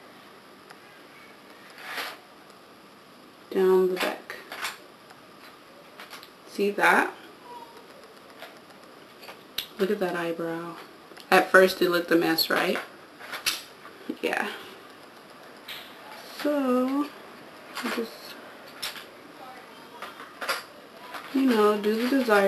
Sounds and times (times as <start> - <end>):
Inside, small room: 0.0 - 22.4
Speech: 3.5 - 4.4, 6.5 - 7.2, 9.8 - 12.8, 14.1 - 14.6, 16.2 - 17.2, 17.8 - 18.4, 21.3 - 22.4.